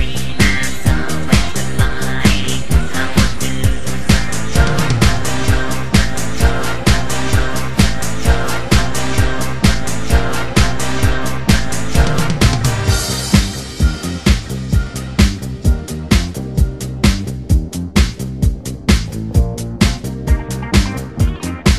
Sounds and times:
Pop music: 0.0s - 21.7s.

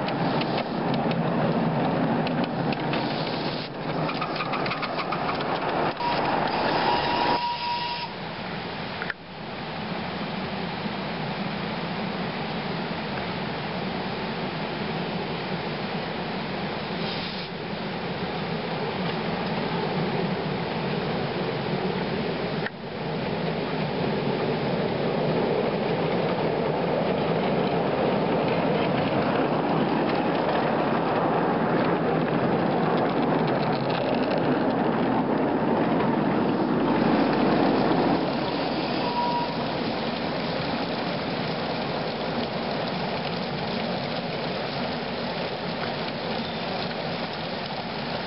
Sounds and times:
Train: 0.0s - 48.2s.

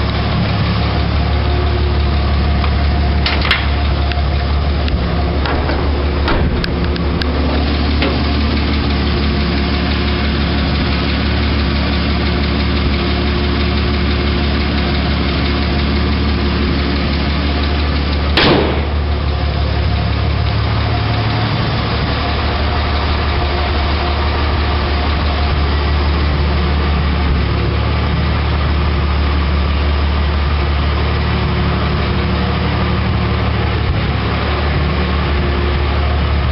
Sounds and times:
Vehicle: 0.0s - 36.5s.

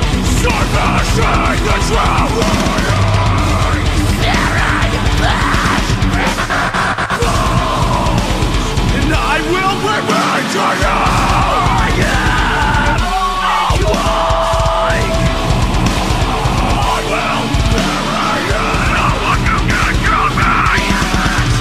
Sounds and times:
Electric guitar: 0.0s - 21.6s.

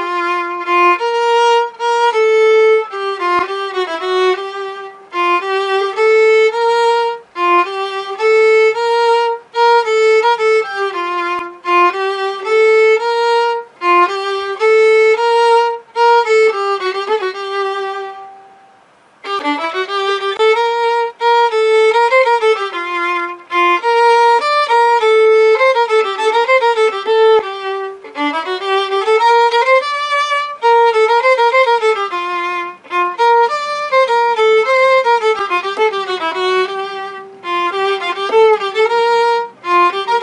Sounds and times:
Violin, fiddle: 0.0s - 40.2s.

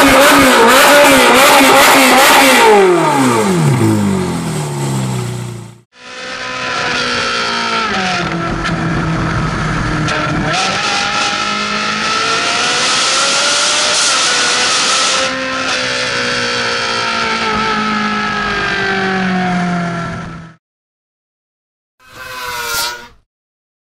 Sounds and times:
Accelerating, revving, vroom: 0.0s - 4.5s, 6.0s - 8.8s, 10.0s - 20.3s
Car: 0.0s - 20.6s.

